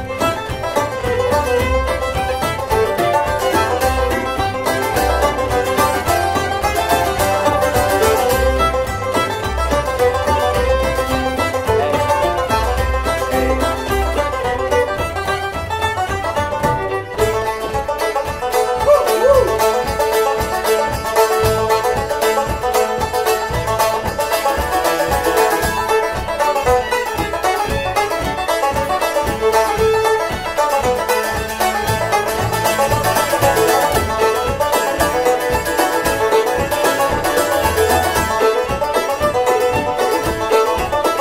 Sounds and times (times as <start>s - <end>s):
Violin, fiddle: 0.0s - 41.2s.